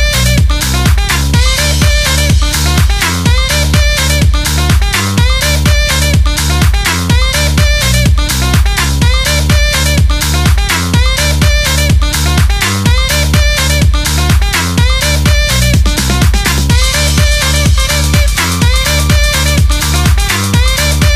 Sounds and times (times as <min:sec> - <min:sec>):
Disco: 0:00.0 - 0:21.1
House music: 0:00.0 - 0:21.1.